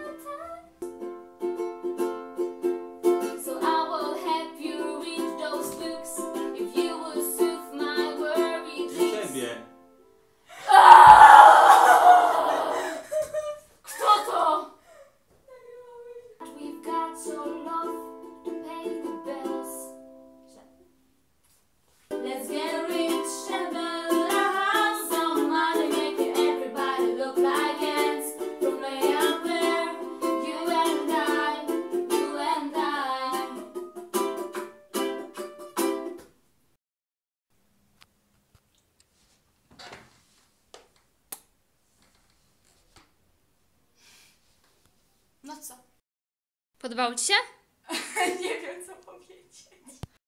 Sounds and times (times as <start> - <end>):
Ukulele: 0.0 - 9.8, 16.4 - 20.7, 22.1 - 36.4
Guitar: 22.2 - 36.4.